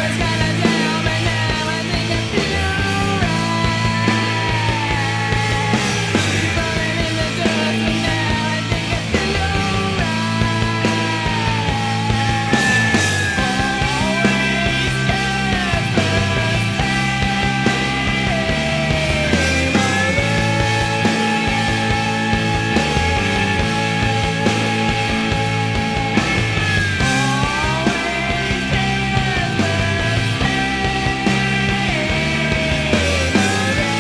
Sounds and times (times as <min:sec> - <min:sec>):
Grunge: 0:00.0 - 0:34.0.